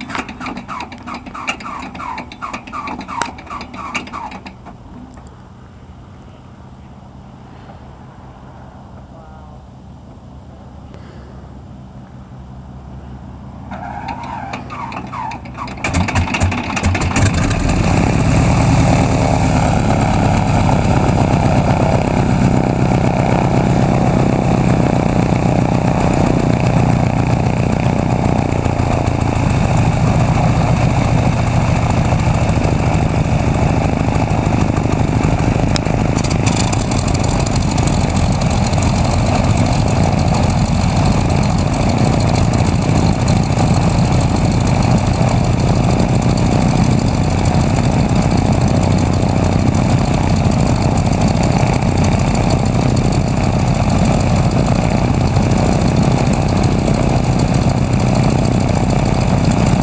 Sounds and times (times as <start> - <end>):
Heavy engine (low frequency): 0.0 - 59.8.